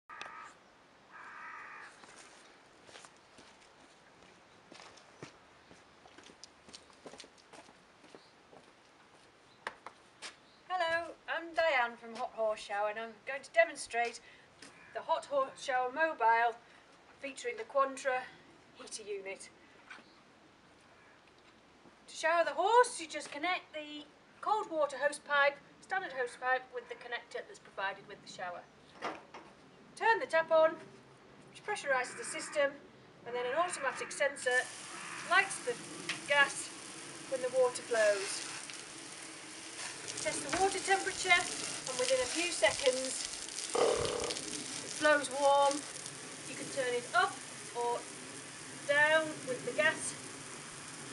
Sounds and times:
Speech: 0:10.7 - 0:14.2, 0:15.0 - 0:16.6, 0:17.2 - 0:19.5, 0:22.1 - 0:28.6, 0:30.0 - 0:30.8, 0:31.6 - 0:34.7, 0:35.3 - 0:36.7, 0:37.3 - 0:38.4, 0:40.2 - 0:43.2, 0:45.0 - 0:45.8, 0:46.5 - 0:48.0, 0:48.9 - 0:50.2.

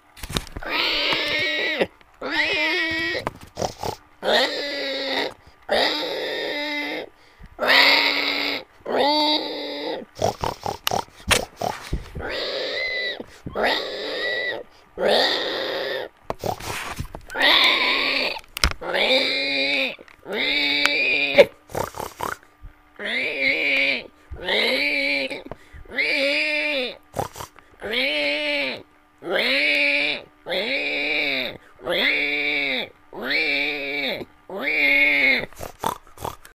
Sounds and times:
Oink: 0:00.6 - 0:22.4, 0:23.0 - 0:36.5.

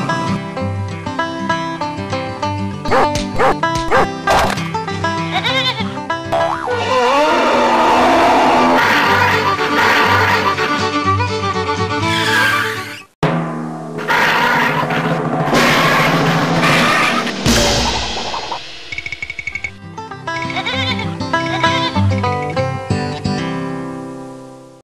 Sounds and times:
Music: 0:00.0 - 0:24.8.

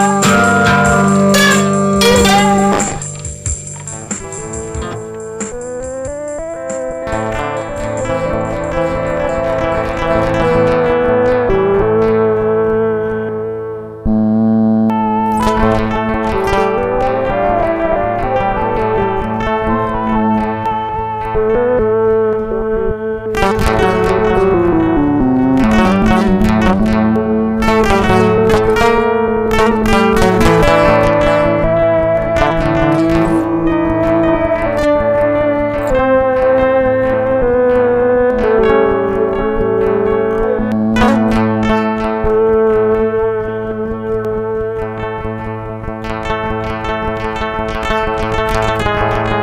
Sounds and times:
Bass guitar: 0:00.0 - 0:49.4
Didgeridoo: 0:00.0 - 0:49.4.

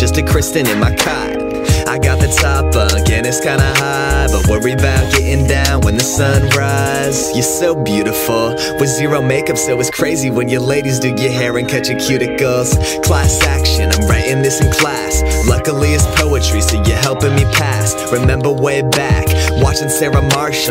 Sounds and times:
Music: 0:00.0 - 0:20.7.

